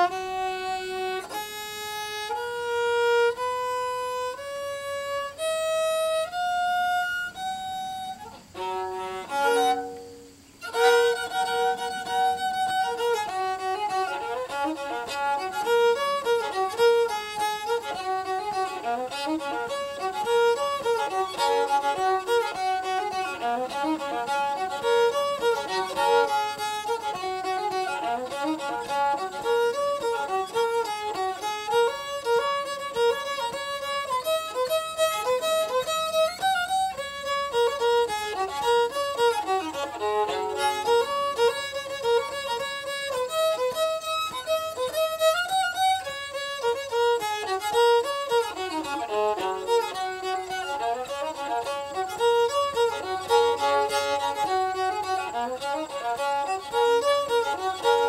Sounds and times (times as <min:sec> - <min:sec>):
Violin, fiddle: 0:00.0 - 0:58.0.